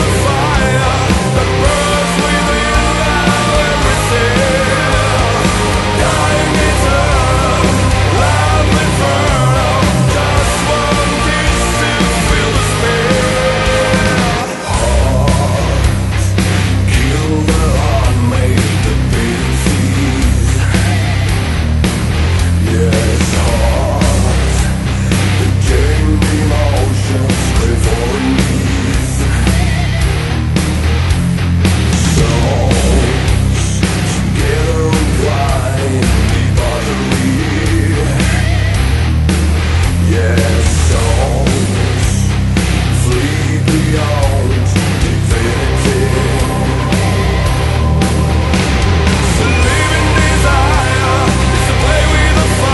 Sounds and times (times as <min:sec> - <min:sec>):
Singing: 0:00.0 - 0:16.3, 0:25.4 - 0:29.6, 0:32.0 - 0:38.5, 0:43.0 - 0:47.6, 0:49.3 - 0:52.7
Angry music: 0:00.0 - 0:52.7.